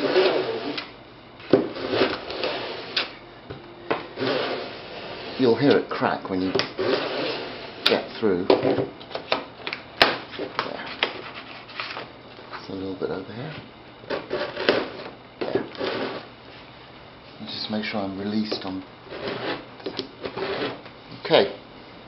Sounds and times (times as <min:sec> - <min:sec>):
Rub: 0:10.8 - 0:11.9.